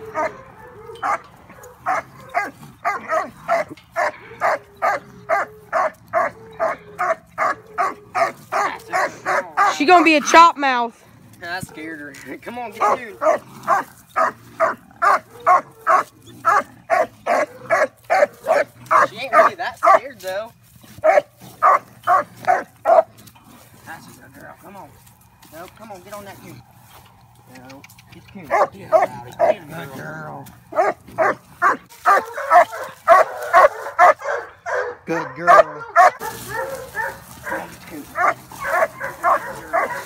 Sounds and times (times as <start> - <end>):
Bow-wow: 0.0 - 9.8, 12.8 - 20.1, 21.0 - 23.2, 28.5 - 29.6, 30.7 - 40.0
Canidae, dogs, wolves: 0.0 - 40.0.